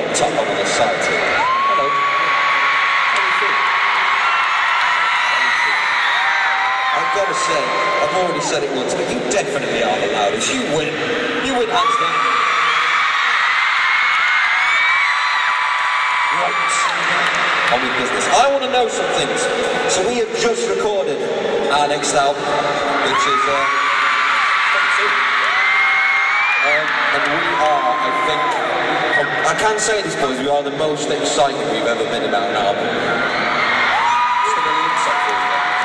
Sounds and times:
Speech: 0.0 - 2.0, 7.0 - 12.2, 16.3 - 23.8, 24.7 - 25.3, 26.6 - 32.9, 34.4 - 35.8.

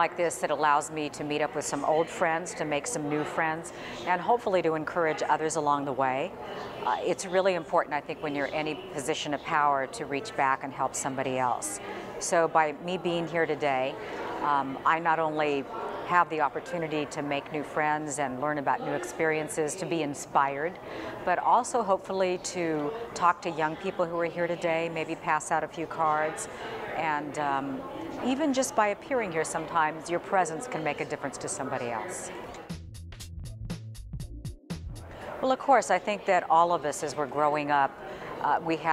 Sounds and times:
Speech: 0.0 - 32.5, 35.4 - 38.9.

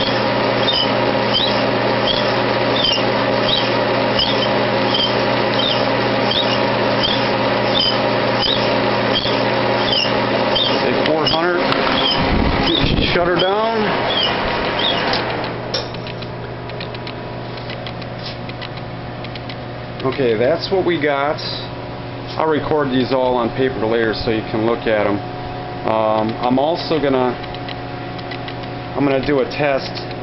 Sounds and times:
Speech: 10.8 - 11.8, 12.7 - 14.0, 20.0 - 21.7, 22.3 - 25.2, 25.9 - 27.4, 29.0 - 30.1.

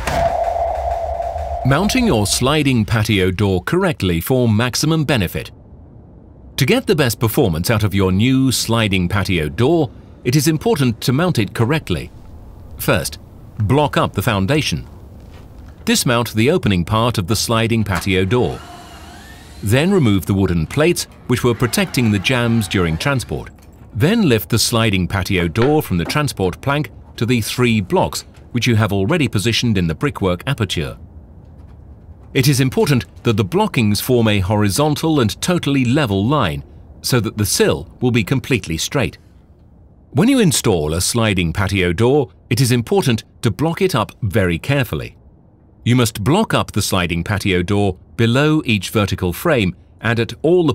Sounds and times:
Speech: 1.7 - 5.6, 6.6 - 12.2, 12.8 - 14.9, 15.8 - 18.6, 19.6 - 31.0, 32.4 - 39.2, 40.2 - 45.2, 45.8 - 50.7.

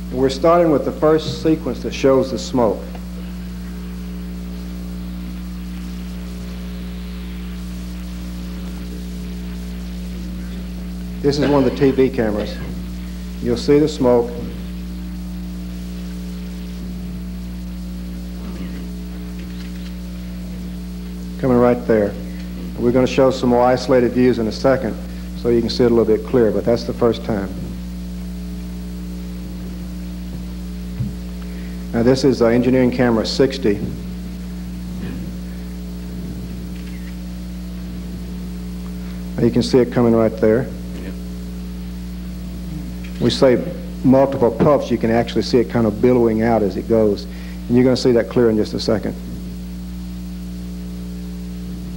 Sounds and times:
Speech: 0.1 - 3.0, 11.2 - 12.8, 13.4 - 14.6, 21.4 - 27.8, 31.9 - 34.0, 39.4 - 41.2, 42.7 - 49.3.

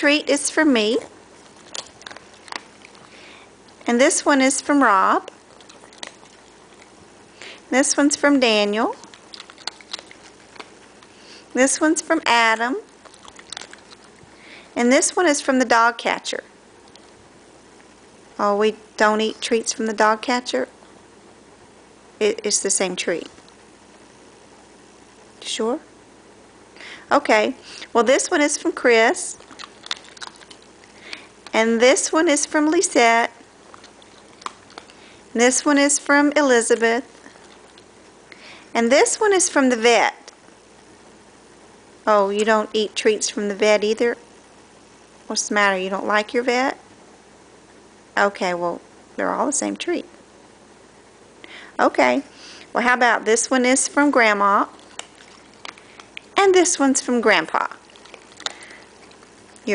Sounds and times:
Speech: 0.0 - 1.1, 3.9 - 5.3, 7.7 - 9.0, 11.5 - 12.9, 14.8 - 16.5, 18.4 - 20.7, 22.2 - 23.4, 25.4 - 25.9, 27.1 - 29.4, 31.5 - 33.4, 35.4 - 37.1, 38.8 - 40.3, 42.1 - 44.2, 45.3 - 46.8, 48.2 - 50.1, 51.8 - 54.8, 56.4 - 57.8.

